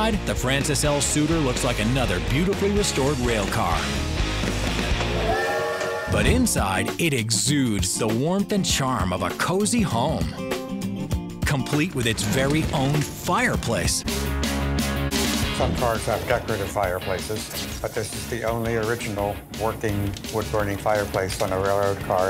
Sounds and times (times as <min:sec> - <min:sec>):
Speech: 0:00.0 - 0:03.9, 0:06.1 - 0:10.4, 0:11.4 - 0:14.0, 0:15.6 - 0:22.3
Music: 0:00.0 - 0:22.3.